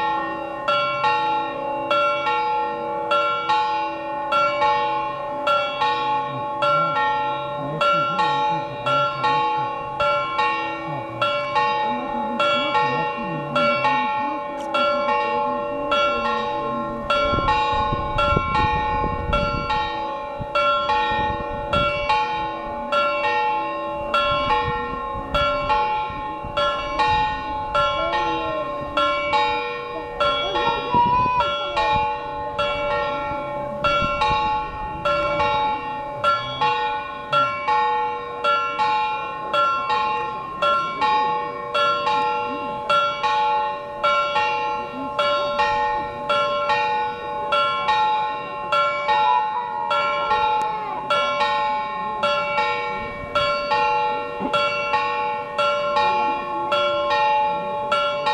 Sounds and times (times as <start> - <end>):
Church bell: 0.0 - 58.3.